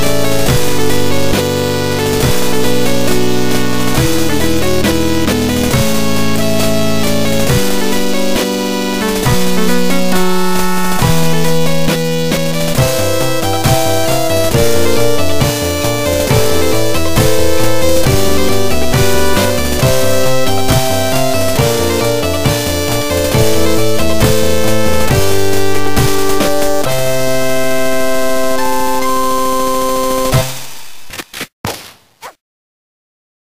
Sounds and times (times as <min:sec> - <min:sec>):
Music: 0:00.0 - 0:30.8.